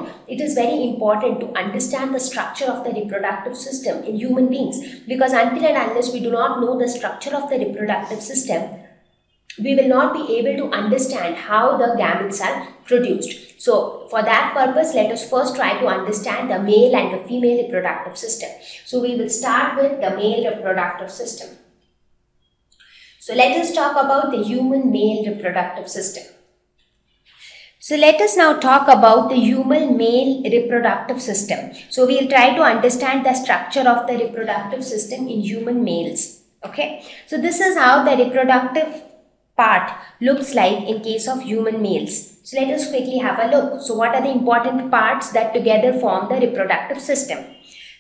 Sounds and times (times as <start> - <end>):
Speech: 0.0 - 8.7, 9.5 - 21.5, 23.0 - 26.3, 27.4 - 39.0, 39.6 - 48.0.